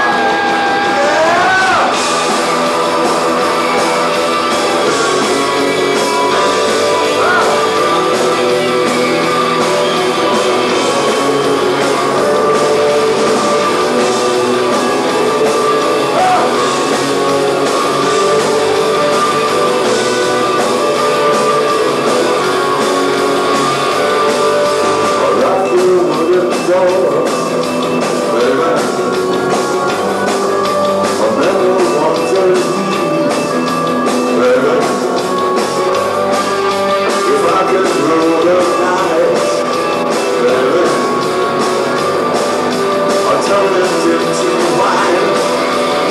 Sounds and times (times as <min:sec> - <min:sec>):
Music: 0:00.0 - 0:46.1.